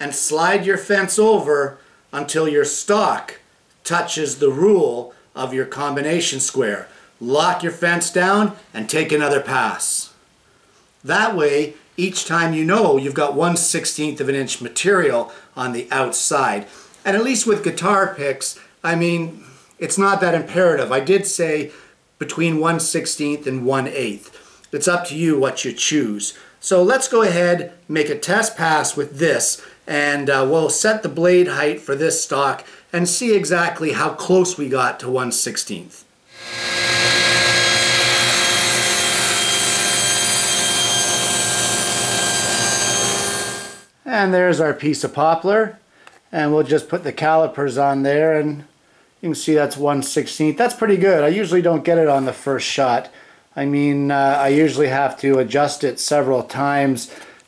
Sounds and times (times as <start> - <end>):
Power tool: 36.3 - 43.9.